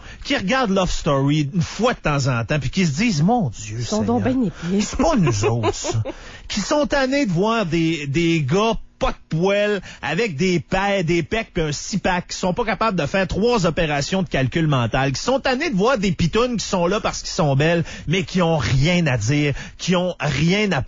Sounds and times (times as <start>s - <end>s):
Speech: 0.2s - 20.8s.